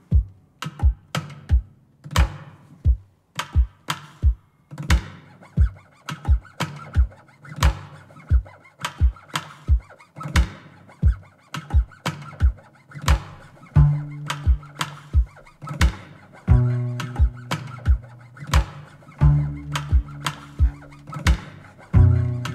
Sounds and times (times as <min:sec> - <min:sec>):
Music: 0:00.0 - 0:22.5
Chop: 0:04.9 - 0:21.9.